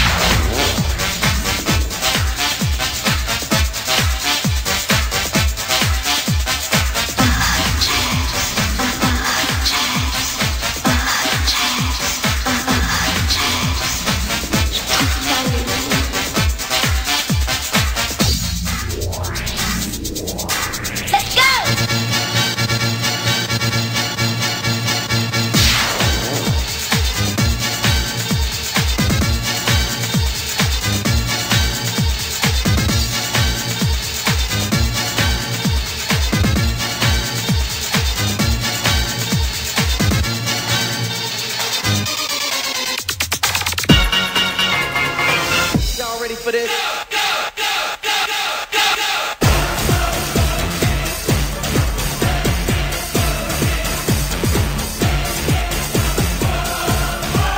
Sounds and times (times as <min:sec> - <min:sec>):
Soundtrack music: 0:00.0 - 0:28.3, 0:42.1 - 0:46.5
Techno: 0:00.0 - 0:48.2, 0:49.4 - 0:57.5.